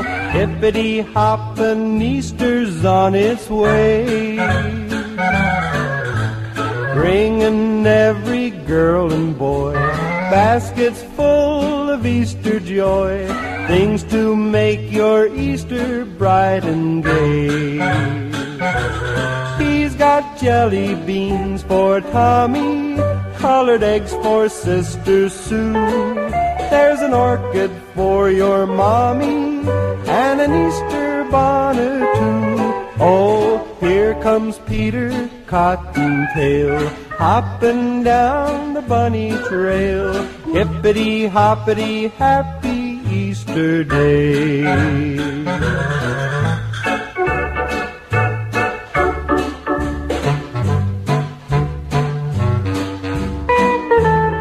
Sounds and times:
Music: 0.0 - 54.4.

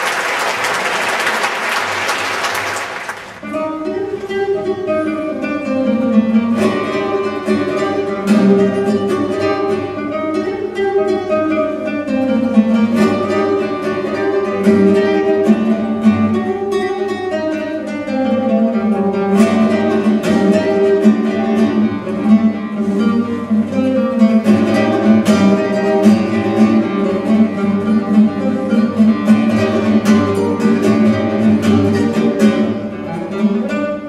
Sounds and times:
Acoustic guitar: 0.0 - 34.0
Flamenco: 0.0 - 34.0
Strum: 3.4 - 34.0.

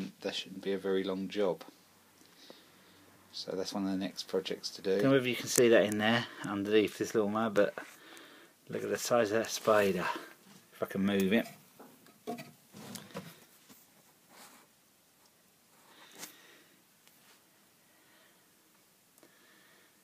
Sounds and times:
Speech: 0.0 - 1.7, 3.3 - 7.8, 8.7 - 11.6.

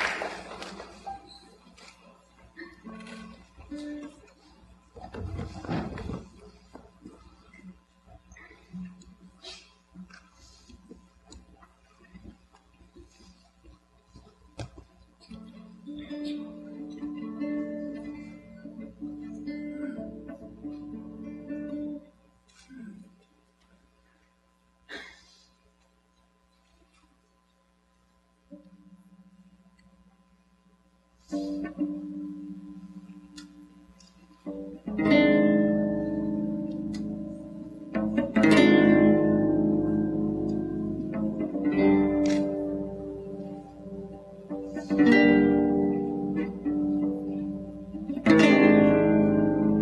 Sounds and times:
Music: 15.3 - 22.2, 34.4 - 49.8.

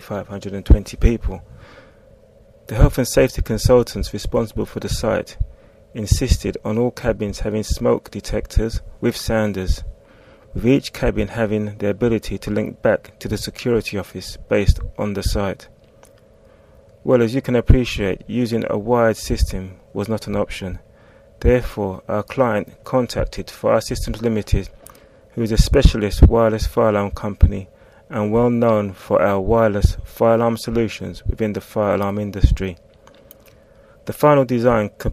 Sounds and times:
Speech: 0.0 - 1.5, 2.7 - 5.4, 6.0 - 9.9, 10.6 - 15.7, 17.0 - 20.8, 21.4 - 24.7, 25.4 - 32.8, 34.1 - 35.1.

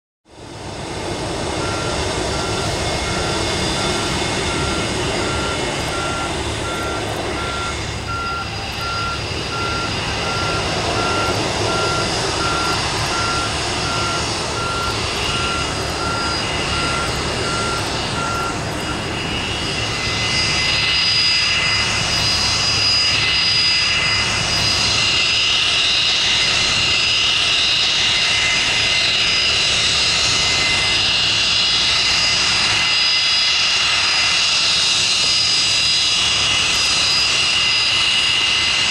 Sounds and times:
Fixed-wing aircraft, airplane: 0.2 - 38.9.

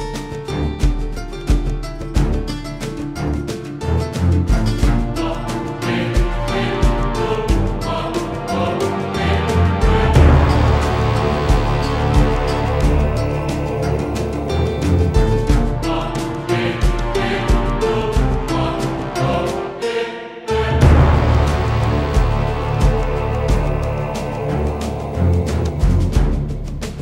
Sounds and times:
Music: 0.0 - 27.0.

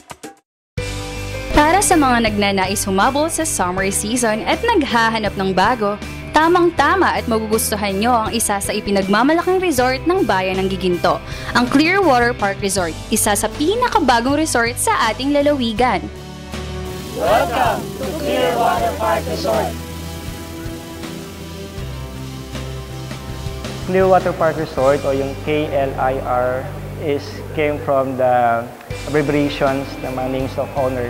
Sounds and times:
Music: 0.0 - 31.1
Speech: 1.6 - 16.1, 17.2 - 19.8, 23.9 - 31.1.

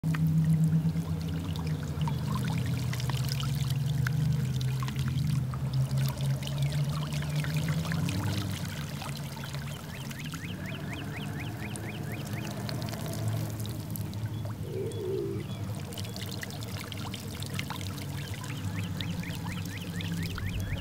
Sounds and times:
Bird: 6.6 - 20.8.

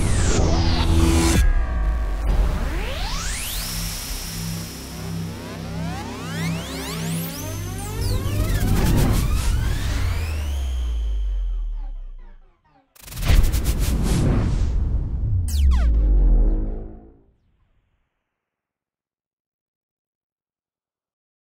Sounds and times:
Music: 0.0 - 17.4.

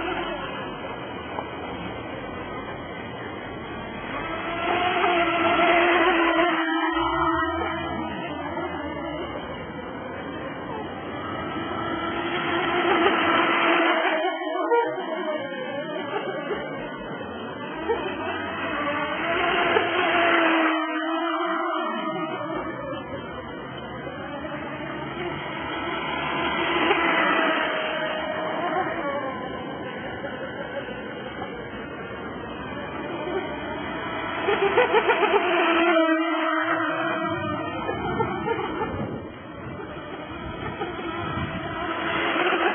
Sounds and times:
Motorboat, speedboat: 0.0 - 42.7.

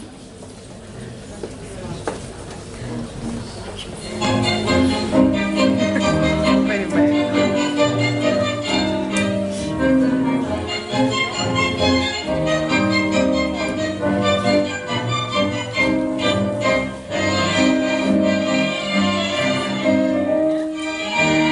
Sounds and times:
Music: 4.0 - 21.5.

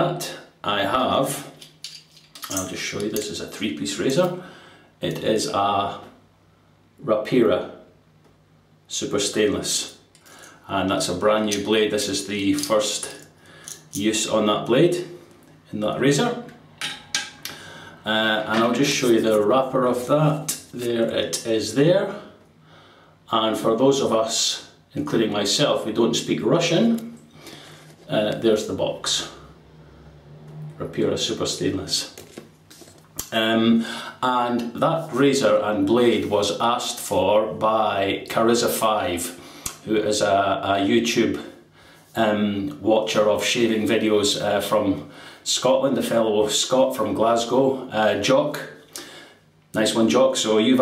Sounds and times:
Speech: 0.0 - 1.6, 2.4 - 4.4, 5.0 - 6.2, 7.0 - 7.9, 8.9 - 10.0, 10.6 - 13.2, 13.9 - 16.6, 18.0 - 22.3, 23.3 - 27.2, 28.0 - 29.4, 30.8 - 32.2, 33.2 - 48.8, 49.8 - 50.8.

